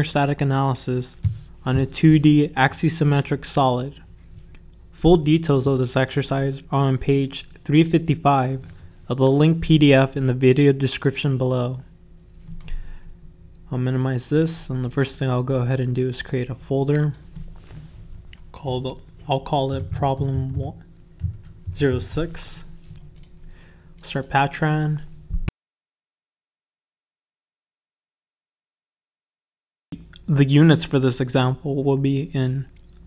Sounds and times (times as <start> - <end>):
Speech: 0.0 - 4.1, 5.0 - 11.9, 13.7 - 17.2, 18.5 - 20.9, 21.7 - 22.7, 24.0 - 25.1, 30.2 - 32.7.